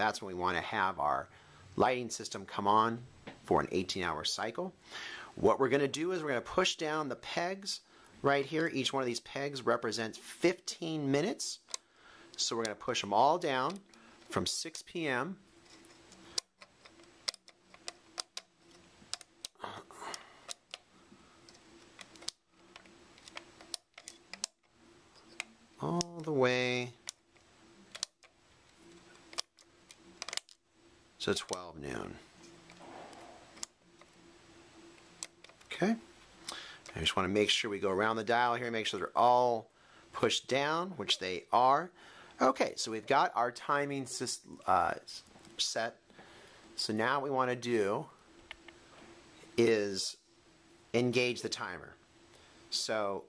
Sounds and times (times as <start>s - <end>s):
Speech: 0.0s - 4.8s, 5.4s - 11.7s, 12.4s - 15.4s, 25.8s - 27.0s, 31.2s - 32.2s, 35.7s - 36.1s, 36.9s - 46.0s, 46.8s - 48.2s, 49.6s - 50.2s, 51.0s - 52.0s, 52.7s - 53.2s.